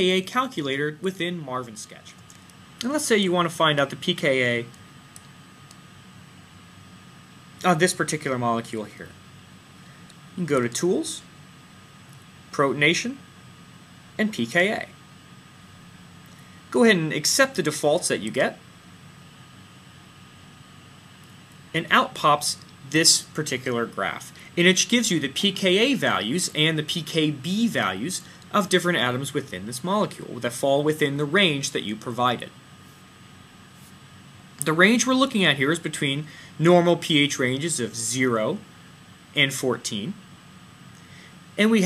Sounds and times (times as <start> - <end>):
Speech: 0.0 - 2.2, 2.8 - 4.8, 7.6 - 9.2, 10.4 - 11.3, 12.5 - 13.3, 14.2 - 15.0, 16.7 - 18.6, 21.7 - 32.6, 34.6 - 38.7, 39.3 - 40.2, 41.6 - 41.8.